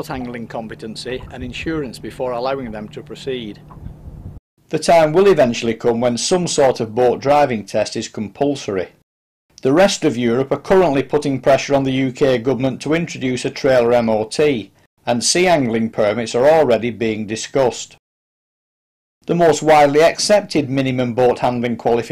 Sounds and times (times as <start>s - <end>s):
Speech: 0.0s - 3.6s, 4.7s - 9.0s, 9.6s - 18.0s, 19.3s - 22.1s.